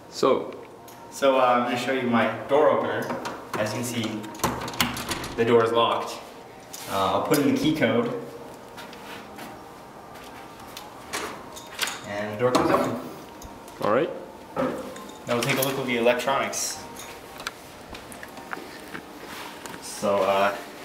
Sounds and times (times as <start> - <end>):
Speech: 1.2 - 4.3, 5.4 - 6.3, 6.9 - 8.3, 12.1 - 13.0, 15.3 - 16.8, 19.8 - 20.7.